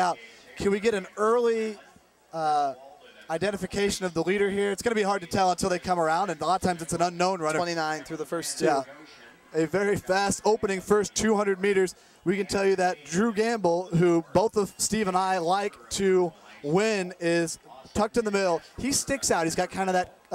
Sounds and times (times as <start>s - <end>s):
Speech: 0.0s - 20.3s.